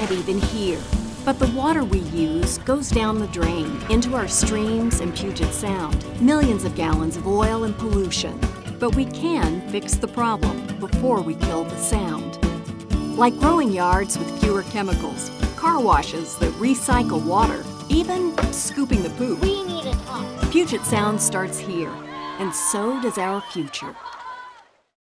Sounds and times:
Speech: 0:00.0 - 0:12.3, 0:13.2 - 0:24.0
Music: 0:00.0 - 0:24.0.

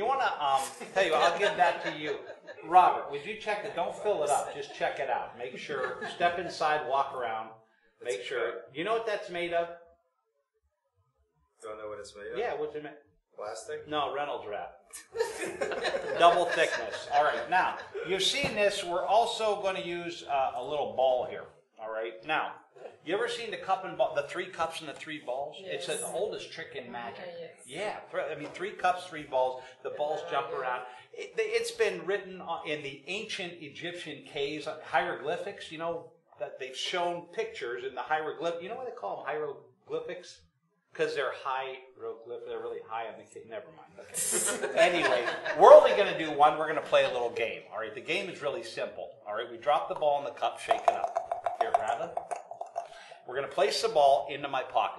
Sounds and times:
Speech: 0:00.0 - 0:09.8, 0:11.6 - 0:14.7, 0:15.8 - 0:40.4, 0:41.0 - 0:52.2, 0:53.3 - 0:54.9.

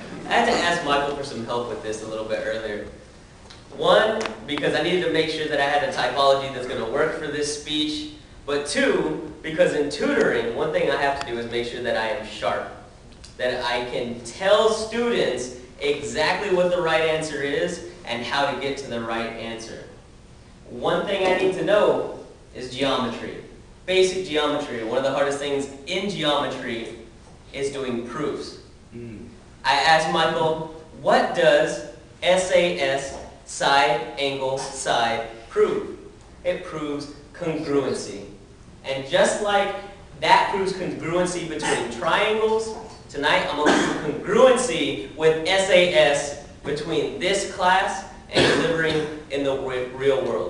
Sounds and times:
Male speech, man speaking: 0:00.2 - 0:03.0, 0:03.7 - 0:20.0, 0:20.7 - 0:50.4.

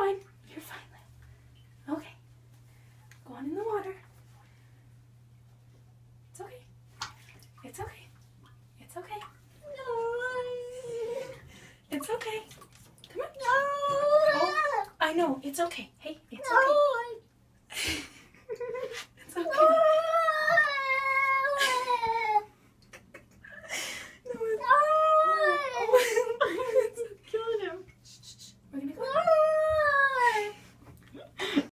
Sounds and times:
Speech: 0:03.2 - 0:04.0, 0:07.6 - 0:08.1, 0:08.8 - 0:11.3, 0:11.9 - 0:12.5, 0:13.1 - 0:17.2, 0:26.9 - 0:27.9, 0:28.7 - 0:30.6.

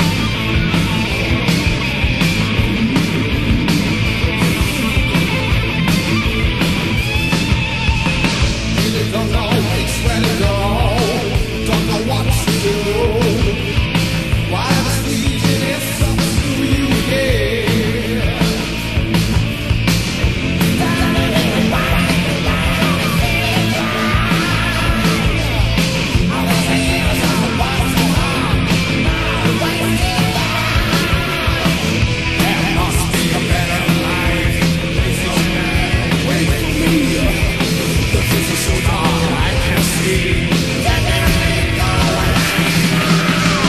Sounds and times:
Music: 0:00.0 - 0:43.6.

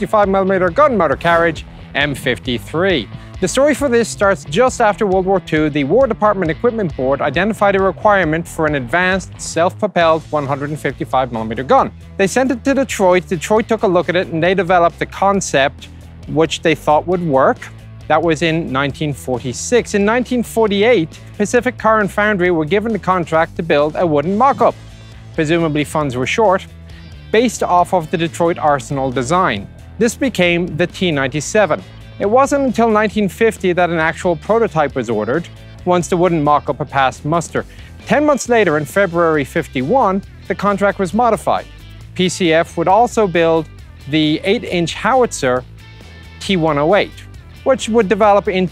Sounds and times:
Speech: 0:00.0 - 0:24.8, 0:25.4 - 0:26.7, 0:27.3 - 0:45.6, 0:46.4 - 0:48.7
Music: 0:00.0 - 0:48.7.

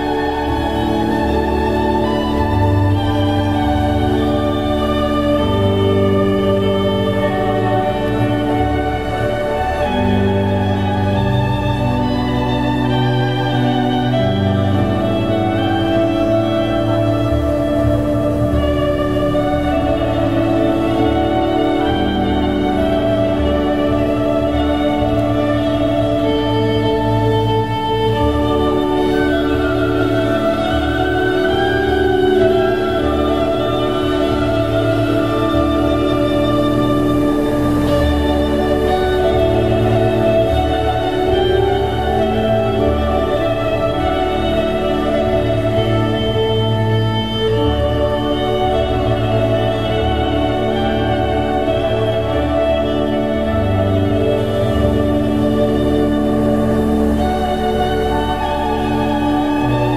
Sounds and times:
Classical music: 0:00.0 - 0:59.9
Musical instrument: 0:00.0 - 0:59.9
Traditional music: 0:00.0 - 0:59.9.

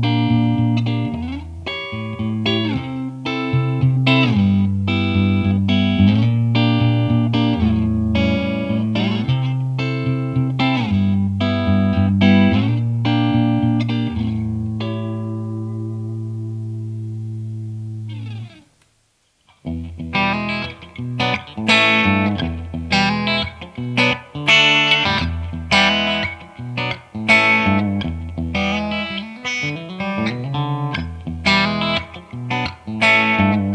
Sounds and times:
Electric guitar: 0:00.0 - 0:33.7.

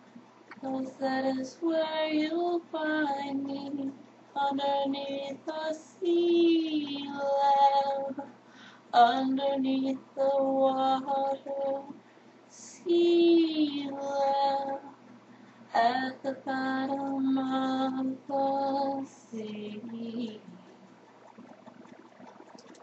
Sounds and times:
Female singing: 0:00.6 - 0:08.4, 0:09.0 - 0:12.0, 0:12.6 - 0:14.9, 0:15.7 - 0:20.6.

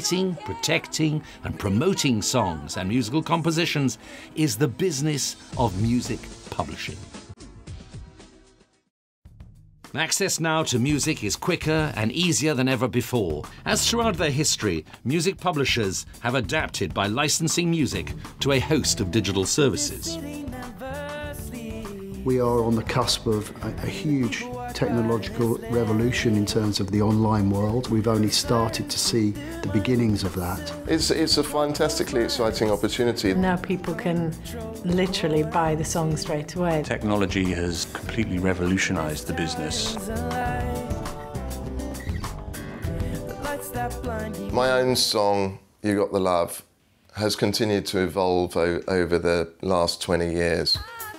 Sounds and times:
Speech: 0:00.0 - 0:07.1, 0:10.0 - 0:20.2, 0:22.2 - 0:40.0, 0:44.5 - 0:50.9
Soundtrack music: 0:00.0 - 0:08.8, 0:17.8 - 0:45.0
Theme music: 0:17.8 - 0:45.1.

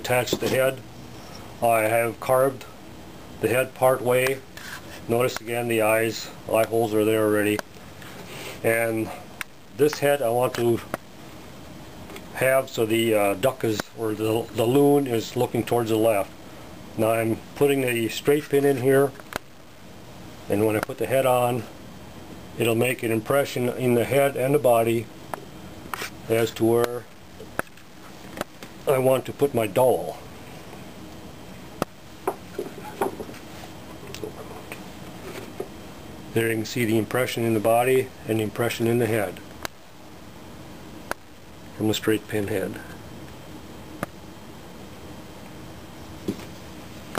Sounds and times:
Speech: 0:00.0 - 0:00.8, 0:01.6 - 0:02.8, 0:03.4 - 0:04.5, 0:05.1 - 0:07.6, 0:08.6 - 0:10.9, 0:12.3 - 0:16.3, 0:17.0 - 0:19.2, 0:20.5 - 0:21.7, 0:22.6 - 0:25.1, 0:26.2 - 0:27.1, 0:28.8 - 0:30.3, 0:34.0 - 0:34.8, 0:36.3 - 0:39.5, 0:41.7 - 0:43.0.

